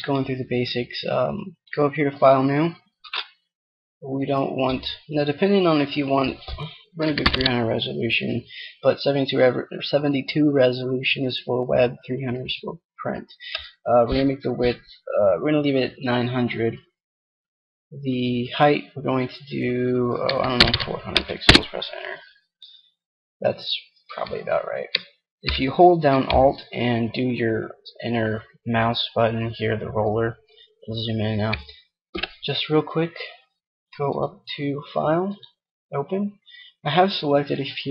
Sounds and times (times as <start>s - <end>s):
Speech: 0.0s - 3.2s, 4.0s - 16.9s, 18.0s - 22.3s, 23.4s - 31.7s, 32.4s - 33.4s, 34.0s - 37.9s.